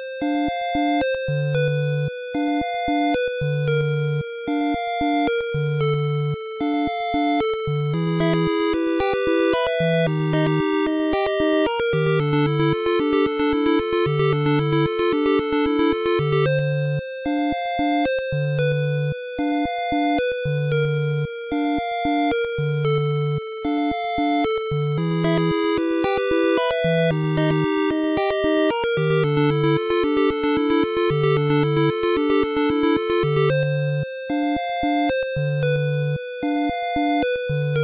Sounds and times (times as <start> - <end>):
Music: 0.0 - 37.8.